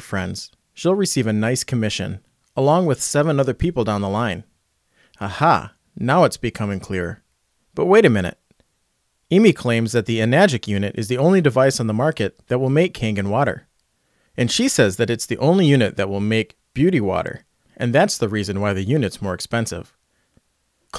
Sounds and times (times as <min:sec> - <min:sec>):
Speech: 0:00.0 - 0:04.5, 0:05.2 - 0:07.2, 0:07.8 - 0:08.4, 0:09.3 - 0:13.7, 0:14.4 - 0:20.0.